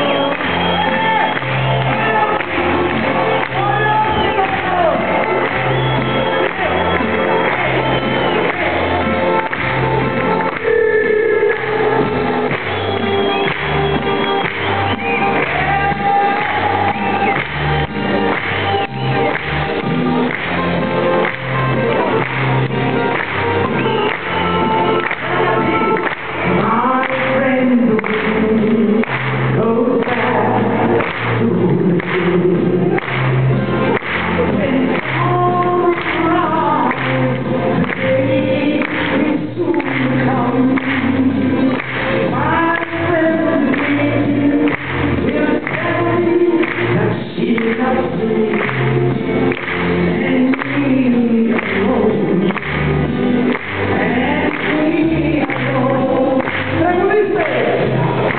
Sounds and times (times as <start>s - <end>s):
Music: 0.0s - 58.3s.